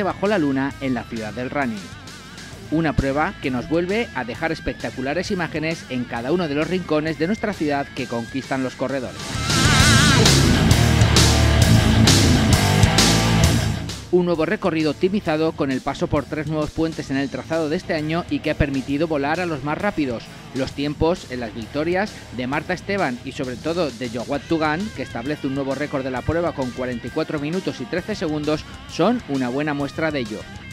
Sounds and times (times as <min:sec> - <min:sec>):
Speech: 0:00.0 - 0:01.9, 0:02.7 - 0:09.2, 0:14.1 - 0:30.5
Music: 0:00.0 - 0:30.7.